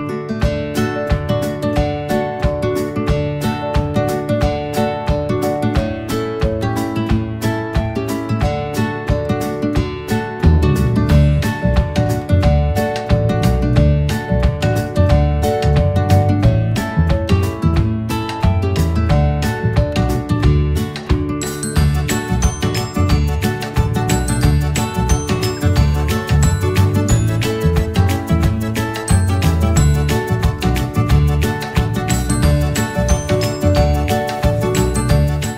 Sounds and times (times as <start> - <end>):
Music: 0.0 - 35.5.